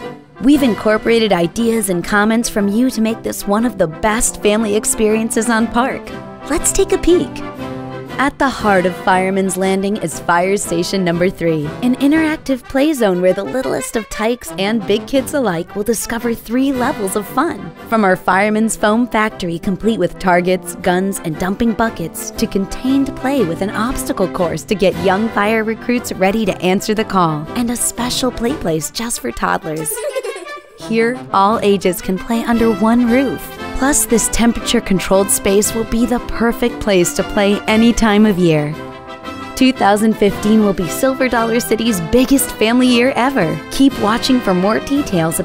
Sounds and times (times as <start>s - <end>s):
Music: 0.0s - 45.4s
Speech: 0.4s - 7.4s, 8.2s - 30.1s, 30.8s - 38.8s, 39.6s - 45.4s.